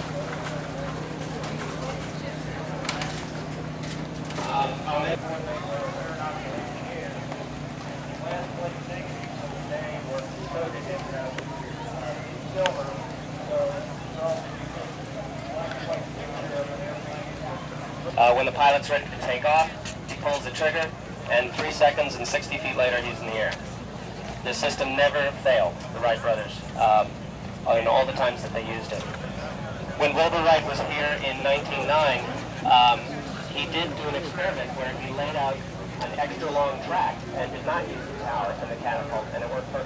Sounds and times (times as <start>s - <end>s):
Speech: 0.0s - 39.8s.